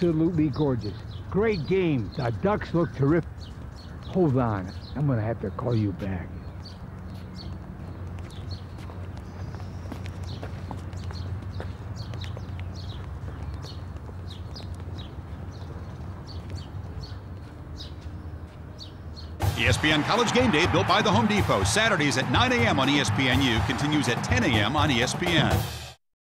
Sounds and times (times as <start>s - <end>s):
Speech: 0.0s - 3.3s, 4.1s - 6.4s, 19.6s - 25.6s
Music: 19.4s - 26.0s.